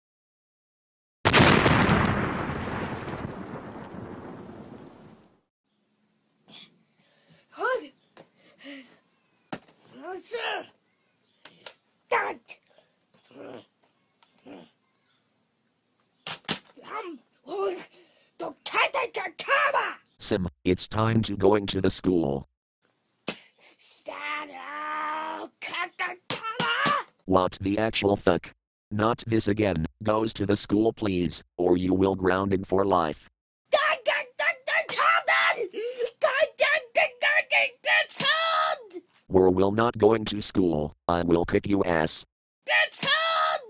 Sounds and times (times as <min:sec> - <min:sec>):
Speech: 0:07.6 - 0:08.0, 0:10.0 - 0:10.7, 0:16.8 - 0:22.5, 0:24.0 - 0:35.6, 0:36.2 - 0:43.6.